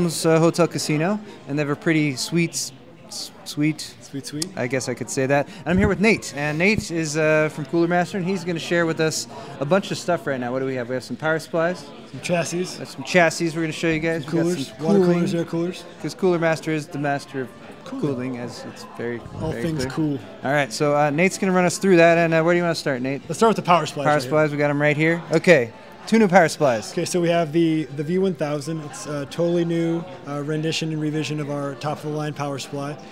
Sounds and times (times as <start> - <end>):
Speech: 0.0 - 33.0.